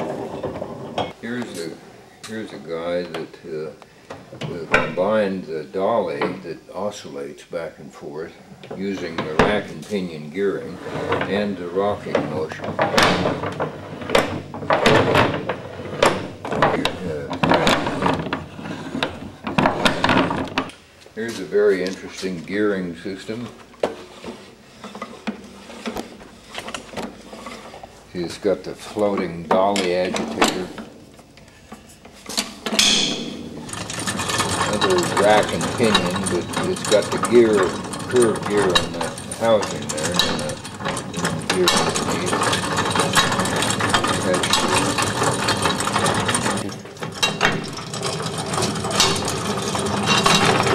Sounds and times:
Speech: 1.2 - 3.8, 4.4 - 13.4, 16.7 - 18.0, 21.2 - 23.6, 28.1 - 30.8, 34.7 - 40.6, 41.2 - 42.5, 44.1 - 45.0, 46.4 - 46.8.

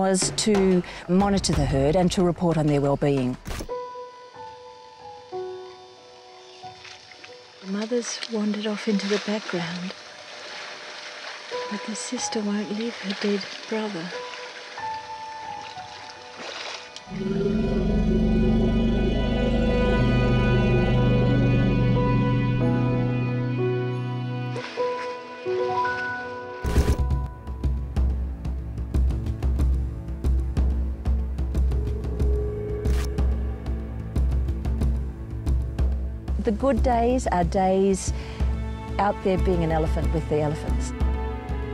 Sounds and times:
Speech: 0.0 - 3.4, 7.7 - 9.9, 11.7 - 14.2, 36.4 - 38.2, 39.0 - 40.9
Music: 0.0 - 41.7
Wild animals: 17.1 - 21.5.

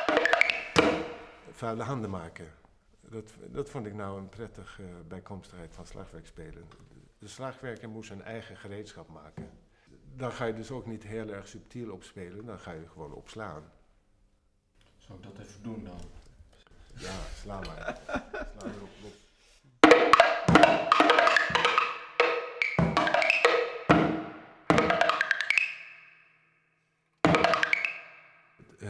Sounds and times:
Wood block: 0.0 - 1.6, 19.8 - 26.2, 27.2 - 28.7
Speech: 1.6 - 13.8, 15.0 - 16.2, 17.0 - 19.3, 28.7 - 28.9.

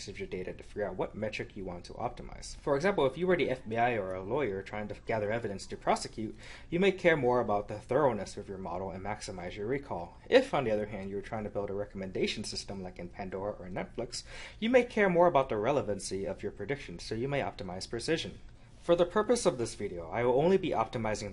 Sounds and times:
Speech: 0.0 - 21.3.

